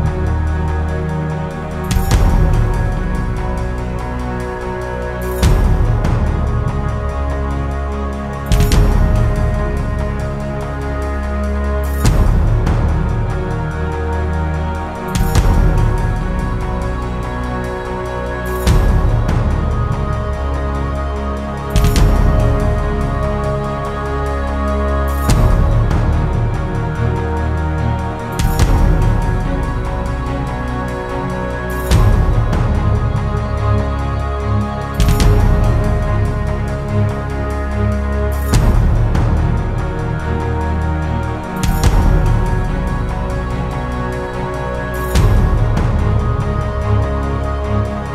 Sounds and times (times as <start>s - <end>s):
Music: 0.0s - 48.1s.